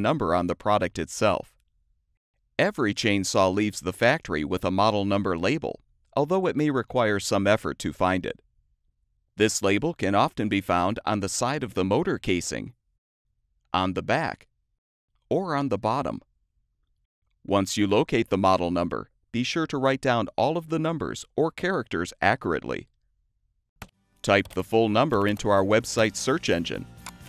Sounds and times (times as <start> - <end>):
Speech: 0.0 - 1.6, 2.6 - 8.4, 9.4 - 12.8, 13.8 - 14.5, 15.3 - 16.3, 17.5 - 22.9, 24.3 - 26.8.